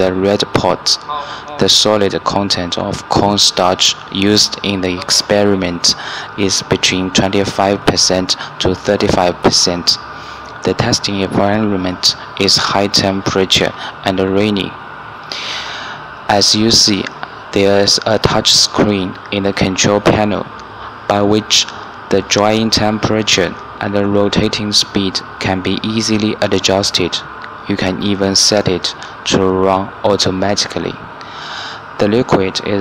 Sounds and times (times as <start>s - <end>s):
Speech: 0.0s - 14.8s, 16.3s - 20.5s, 21.1s - 31.1s, 32.0s - 32.8s.